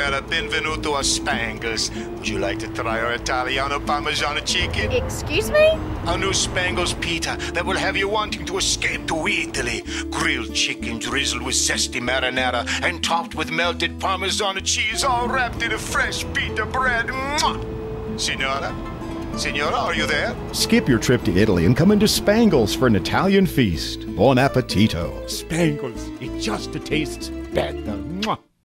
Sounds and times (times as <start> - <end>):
Music: 0.0 - 28.6
Speech: 19.4 - 28.5.